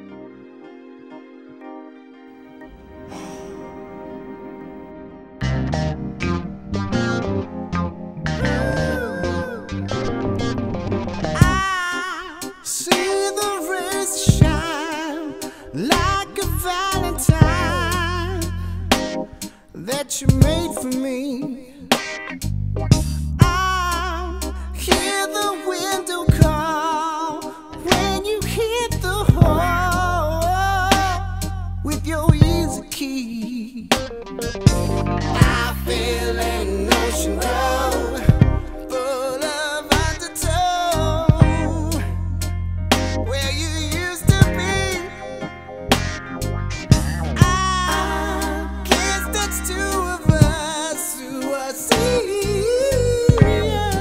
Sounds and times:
Rhythm and blues: 0:00.0 - 0:54.0.

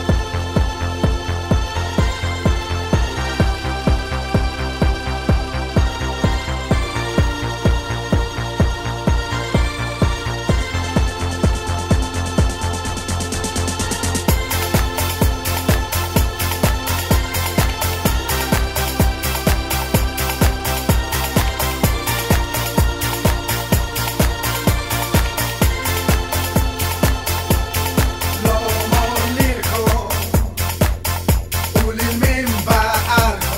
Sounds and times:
Music: 0:00.0 - 0:33.5.

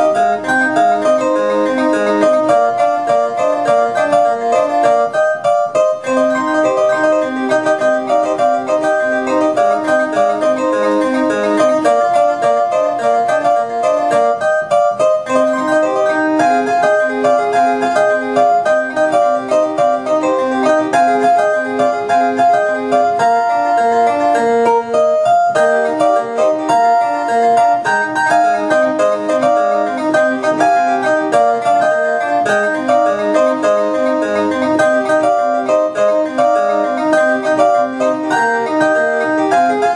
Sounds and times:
Harpsichord: 0:00.0 - 0:39.9.

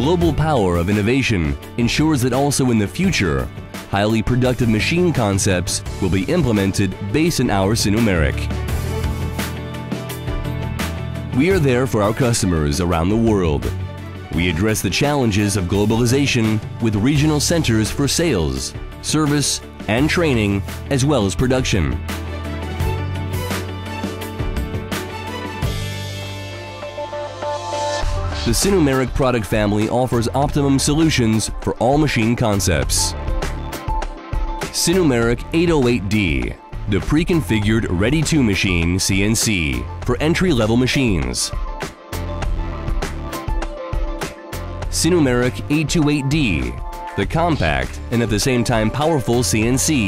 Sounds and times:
Speech: 0:00.0 - 0:08.5, 0:11.4 - 0:22.0, 0:28.5 - 0:33.2, 0:34.8 - 0:41.6, 0:44.9 - 0:50.0
Music: 0:00.0 - 0:50.0.

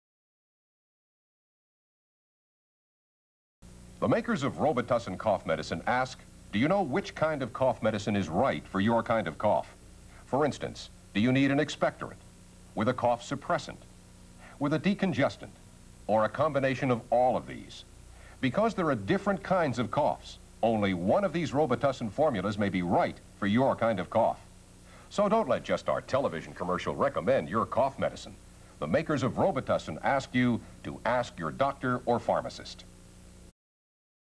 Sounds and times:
Speech: 0:04.0 - 0:13.9, 0:14.5 - 0:24.5, 0:25.1 - 0:32.9.

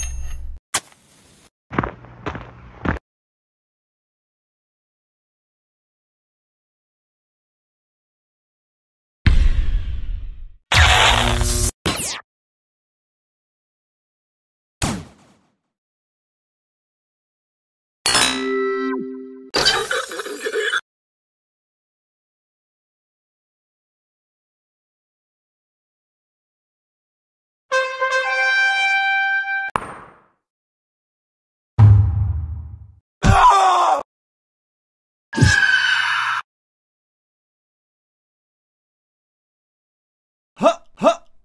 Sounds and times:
Music: 0:27.7 - 0:29.7.

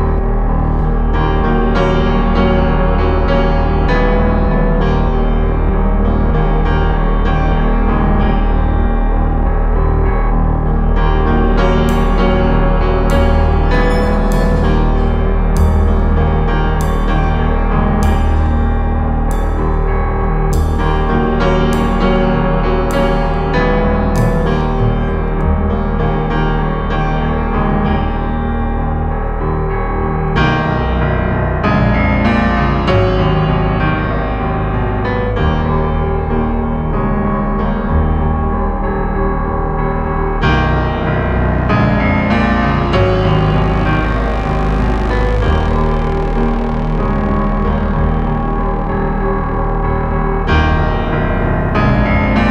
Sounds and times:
Music: 0:00.0 - 0:52.5.

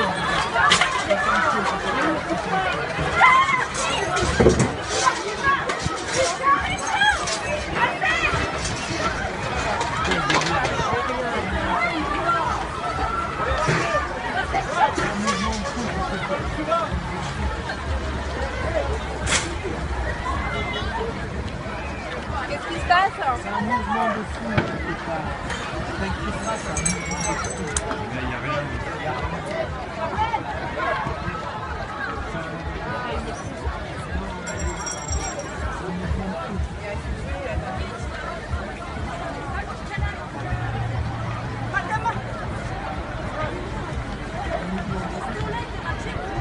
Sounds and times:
Speech: 0:00.0 - 0:46.4.

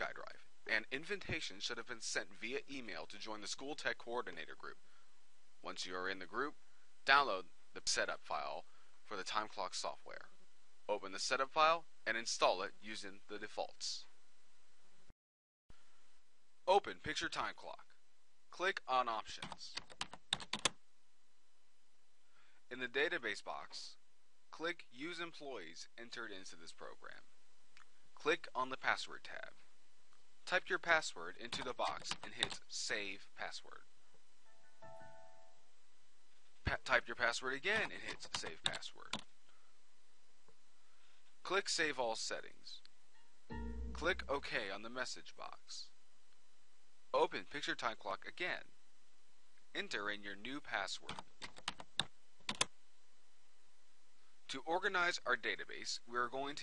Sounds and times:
Speech: 0:00.0 - 0:04.8, 0:05.6 - 0:14.2, 0:16.7 - 0:19.8, 0:22.7 - 0:27.3, 0:28.2 - 0:29.7, 0:30.4 - 0:33.9, 0:36.6 - 0:39.2, 0:41.4 - 0:42.9, 0:43.9 - 0:46.0, 0:47.1 - 0:48.7, 0:49.7 - 0:51.2, 0:54.5 - 0:56.6.

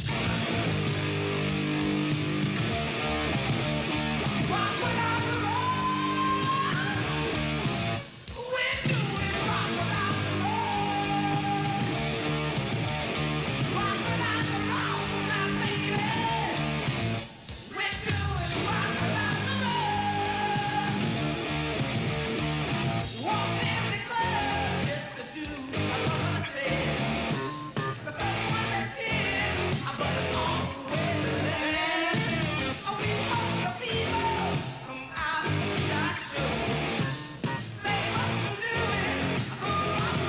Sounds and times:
Music: 0:00.0 - 0:40.2.

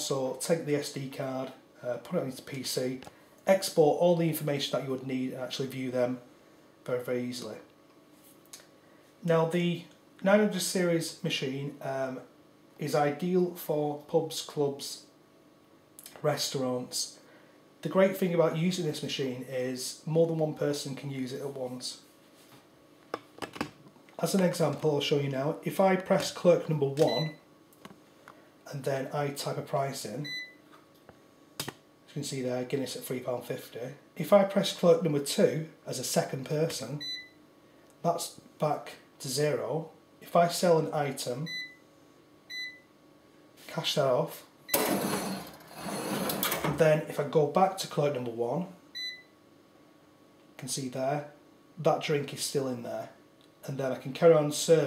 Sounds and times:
Speech: 0:00.0 - 0:06.3, 0:06.9 - 0:07.7, 0:09.2 - 0:15.1, 0:16.0 - 0:17.2, 0:17.8 - 0:22.1, 0:24.2 - 0:27.4, 0:28.7 - 0:30.3, 0:32.1 - 0:37.0, 0:38.0 - 0:41.6, 0:43.6 - 0:44.5, 0:46.6 - 0:48.8, 0:50.6 - 0:54.8.

